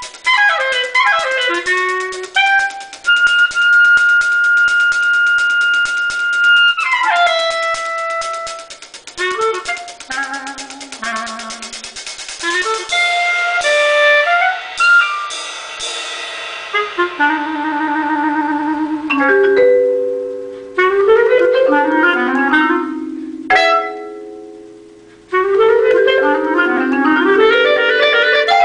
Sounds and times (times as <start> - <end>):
Music: 0.0 - 28.6.